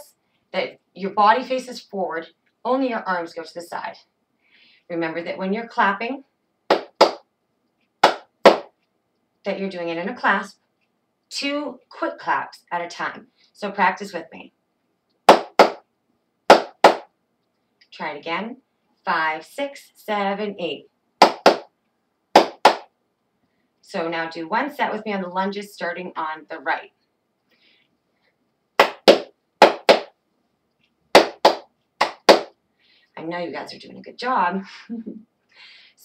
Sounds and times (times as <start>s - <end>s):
Speech: 0.0s - 4.1s, 4.9s - 6.3s, 9.5s - 10.6s, 11.3s - 14.6s, 17.8s - 20.9s, 23.8s - 27.0s, 33.2s - 35.0s.